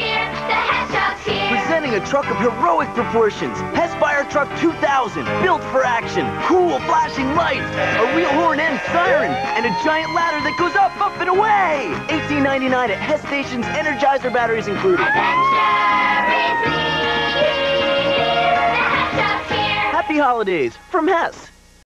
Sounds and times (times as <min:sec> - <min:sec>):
Music: 0:00.0 - 0:21.8
Speech: 0:01.6 - 0:15.0, 0:20.0 - 0:21.6.